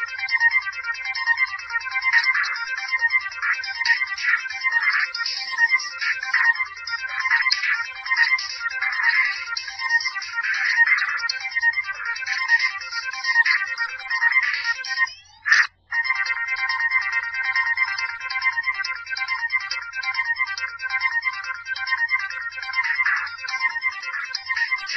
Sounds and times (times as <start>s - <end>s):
Video game music: 0.0s - 24.9s.